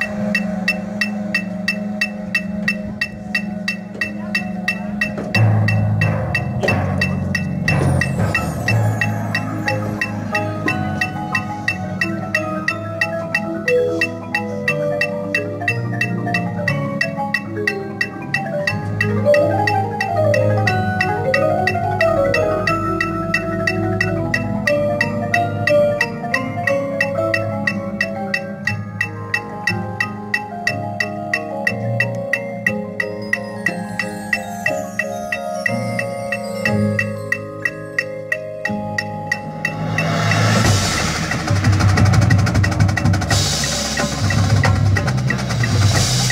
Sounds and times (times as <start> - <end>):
Music: 0.0 - 46.3.